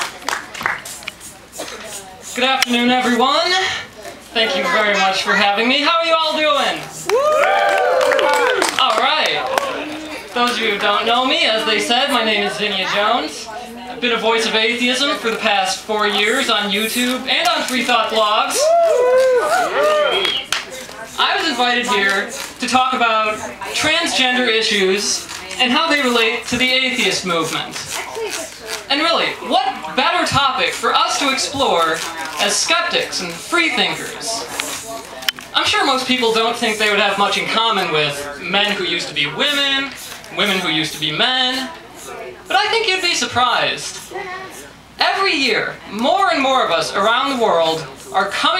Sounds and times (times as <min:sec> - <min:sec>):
Female speech, woman speaking: 0:01.7 - 0:05.8, 0:11.5 - 0:14.5, 0:27.8 - 0:28.9.